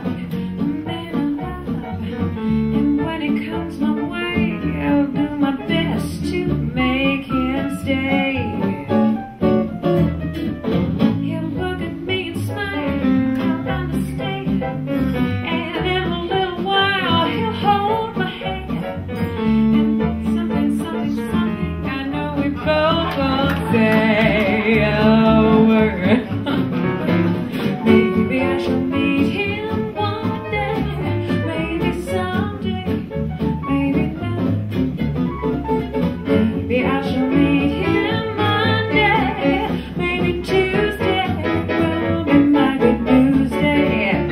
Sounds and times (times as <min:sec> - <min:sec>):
Female singing: 0:00.0 - 0:01.9, 0:02.8 - 0:08.9, 0:11.2 - 0:14.8, 0:15.4 - 0:18.9, 0:20.0 - 0:26.4, 0:27.9 - 0:34.7, 0:36.2 - 0:44.3
Music: 0:00.0 - 0:44.3.